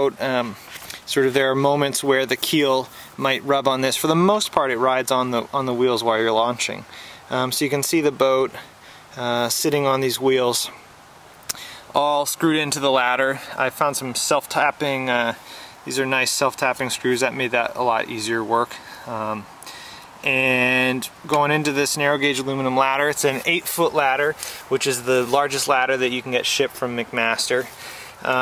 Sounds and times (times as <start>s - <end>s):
Speech: 0.0s - 10.8s, 11.9s - 19.5s, 20.2s - 28.4s.